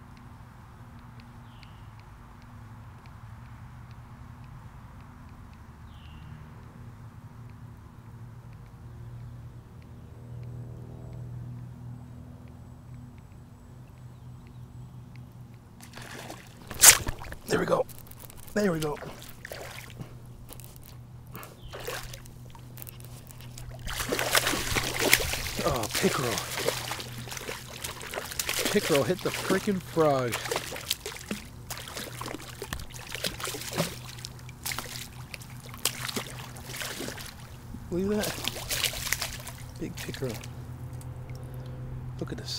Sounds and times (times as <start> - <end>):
Speech: 17.5 - 17.9, 18.5 - 19.2, 25.6 - 26.5, 28.6 - 30.5, 37.9 - 38.5, 39.8 - 40.5, 42.2 - 42.5.